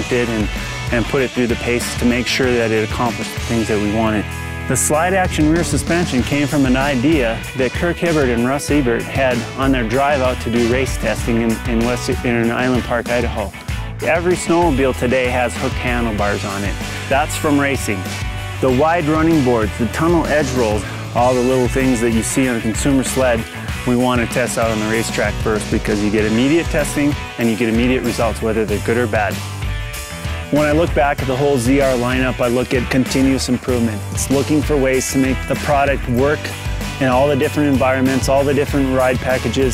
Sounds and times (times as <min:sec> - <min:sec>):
Speech: 0:00.0 - 0:29.4, 0:30.5 - 0:39.7
Music: 0:00.0 - 0:39.7.